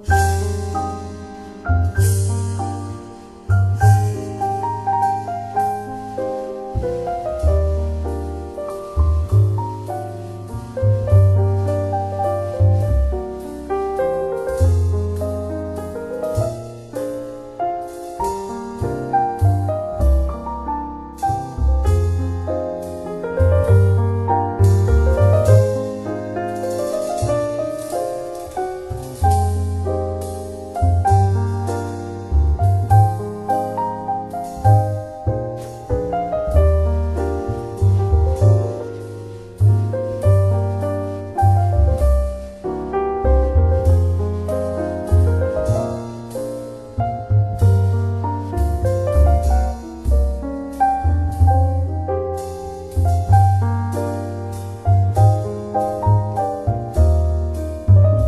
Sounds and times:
Music: 0:00.0 - 0:58.2.

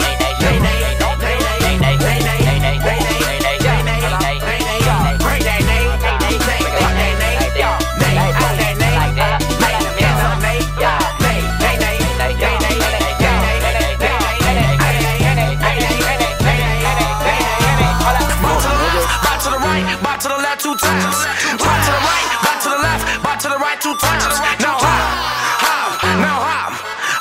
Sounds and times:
Music: 0:00.0 - 0:27.2.

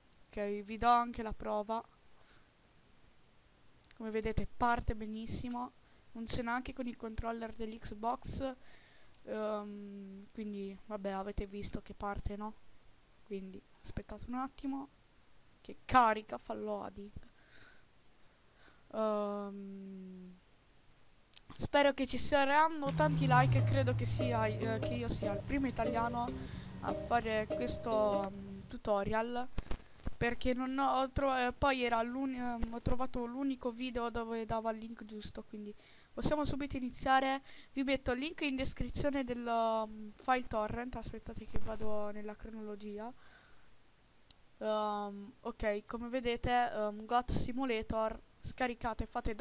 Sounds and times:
Speech: 0:00.3 - 0:01.9, 0:03.9 - 0:08.6, 0:09.2 - 0:12.6, 0:13.3 - 0:14.9, 0:15.6 - 0:17.3, 0:18.9 - 0:20.4, 0:21.4 - 0:29.5, 0:30.2 - 0:43.2, 0:44.6 - 0:49.4.

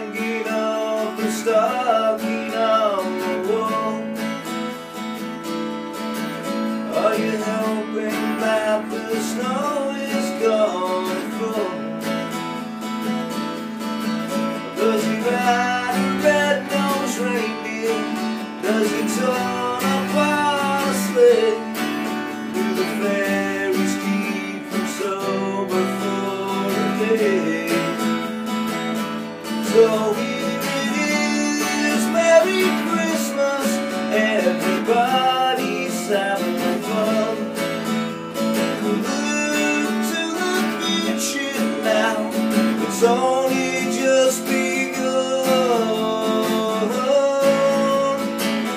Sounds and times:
Acoustic guitar: 0:00.0 - 0:48.7.

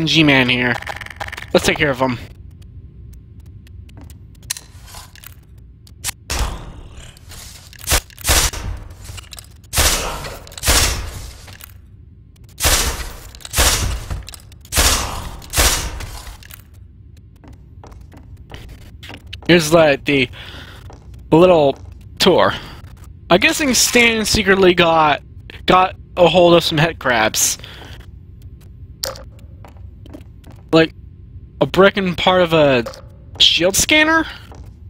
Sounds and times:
Speech: 0:00.0 - 0:00.8, 0:01.5 - 0:02.3, 0:19.4 - 0:20.4, 0:21.3 - 0:22.7, 0:23.3 - 0:27.6, 0:31.6 - 0:34.5.

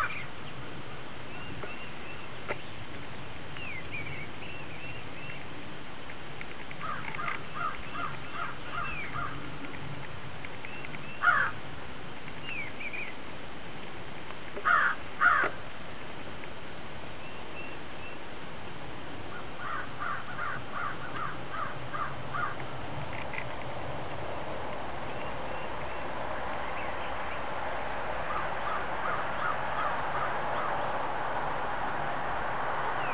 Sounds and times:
Outside, rural or natural: 0:00.0 - 0:33.1
Caw: 0:06.8 - 0:09.4, 0:11.2 - 0:11.6, 0:14.6 - 0:15.6, 0:19.3 - 0:22.6, 0:28.3 - 0:30.4.

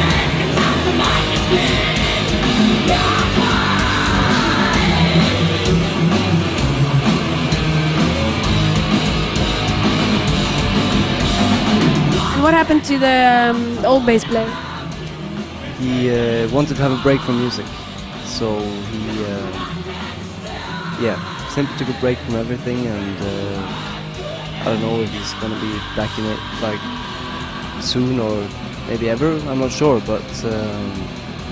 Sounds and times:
Music: 0:00.0 - 0:31.5
Speech: 0:12.4 - 0:14.6, 0:15.7 - 0:17.7, 0:18.3 - 0:19.7, 0:21.0 - 0:23.7, 0:24.6 - 0:26.8, 0:27.8 - 0:31.0.

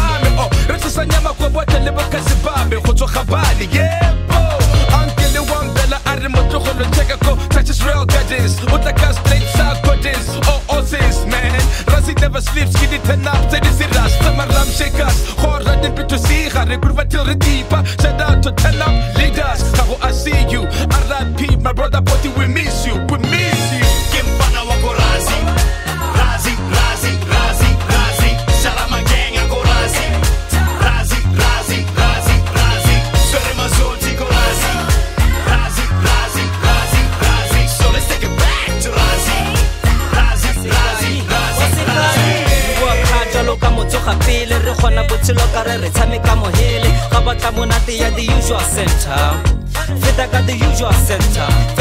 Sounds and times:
Music: 0:00.0 - 0:51.8.

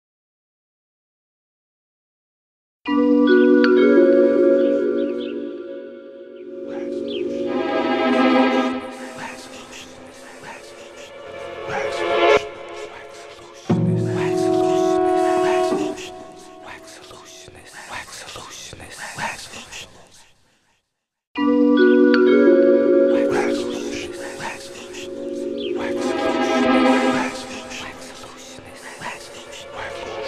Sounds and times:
Music: 0:02.9 - 0:17.5, 0:21.4 - 0:30.2
Speech: 0:06.7 - 0:07.3, 0:08.1 - 0:20.2, 0:23.1 - 0:30.2.

